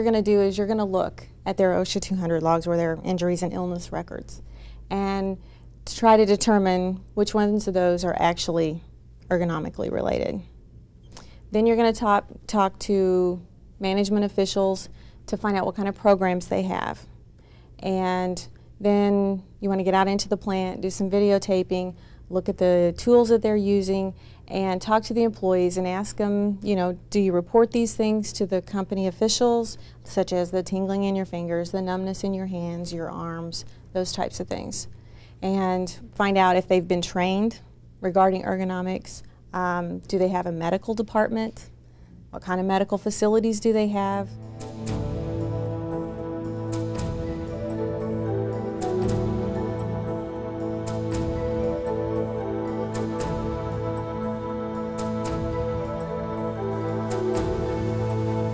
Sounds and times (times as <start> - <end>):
Speech: 0.0 - 10.5, 11.5 - 17.1, 17.8 - 41.7, 42.3 - 44.3
Inside, small room: 0.0 - 58.5.